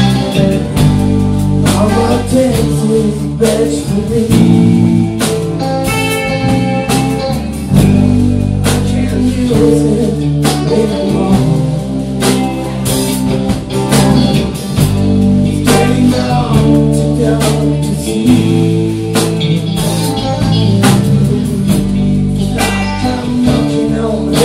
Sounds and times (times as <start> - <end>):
Music: 0.0 - 24.4.